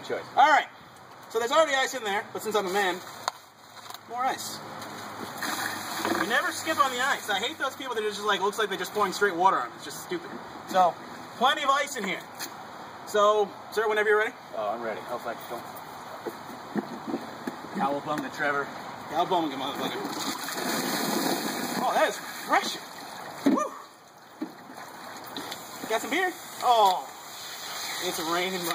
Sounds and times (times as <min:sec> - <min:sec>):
Outside, rural or natural: 0:00.0 - 0:28.7
Water: 0:05.3 - 0:10.2, 0:19.6 - 0:28.7
Liquid: 0:05.4 - 0:06.4, 0:19.9 - 0:28.7.